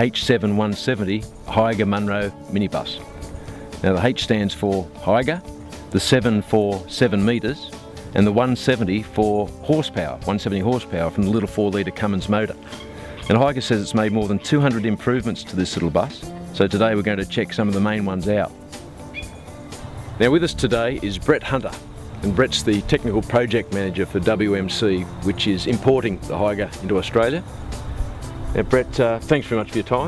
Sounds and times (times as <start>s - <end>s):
Speech: 0.0s - 3.0s, 3.8s - 12.6s, 13.2s - 18.5s, 20.2s - 27.5s, 28.6s - 30.0s
Music: 0.0s - 30.0s.